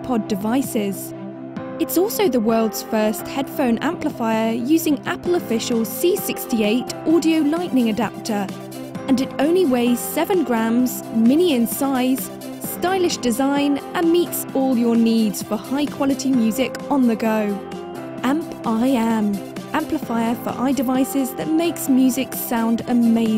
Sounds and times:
Speech: 0:00.0 - 0:01.1, 0:01.8 - 0:08.5, 0:09.1 - 0:17.6, 0:18.2 - 0:23.3
Exciting music: 0:04.3 - 0:23.3.

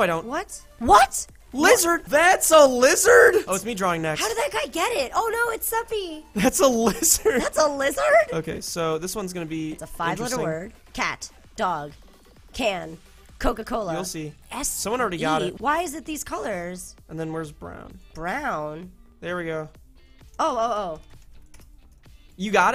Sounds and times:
Speech: 0:10.0 - 0:10.7, 0:15.1 - 0:15.8.

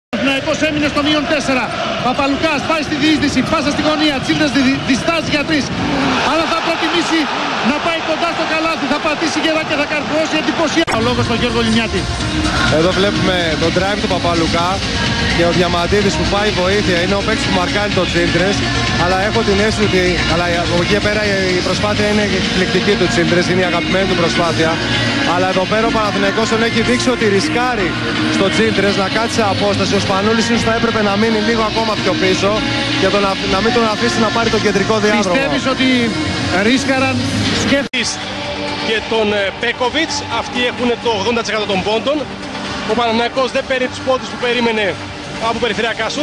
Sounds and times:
Music: 0:00.1 - 0:46.2
Speech: 0:00.2 - 0:12.0, 0:15.4 - 0:38.2.

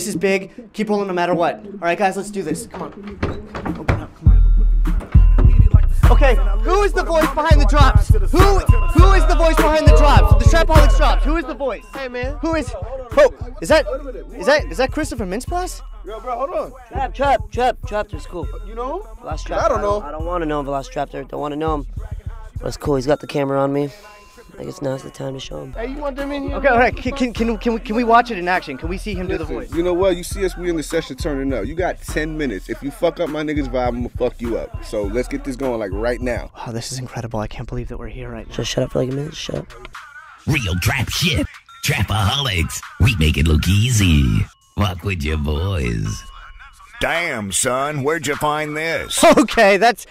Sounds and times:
Rapping: 0:01.4 - 0:50.0
Music: 0:01.6 - 0:50.1
Speech: 0:06.1 - 0:21.8, 0:24.6 - 0:39.7, 0:40.5 - 0:46.4.

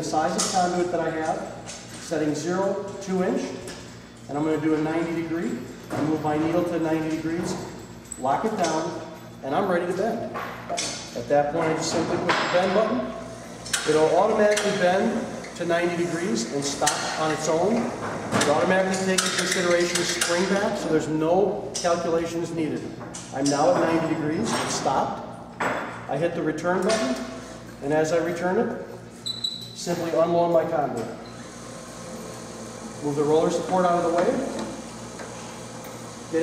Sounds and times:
Inside, large room or hall: 0:00.0 - 0:36.4
Speech: 0:04.3 - 0:13.1, 0:13.8 - 0:25.2, 0:26.1 - 0:28.8, 0:29.8 - 0:31.2, 0:33.0 - 0:34.6.

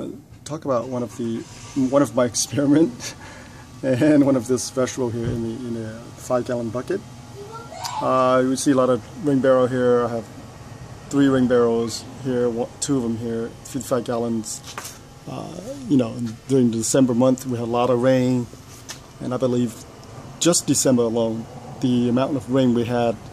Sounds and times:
Speech: 0:00.0 - 0:03.0, 0:03.8 - 0:07.0, 0:07.7 - 0:10.3, 0:11.1 - 0:14.6, 0:15.3 - 0:18.5, 0:19.2 - 0:19.8, 0:20.4 - 0:23.2.

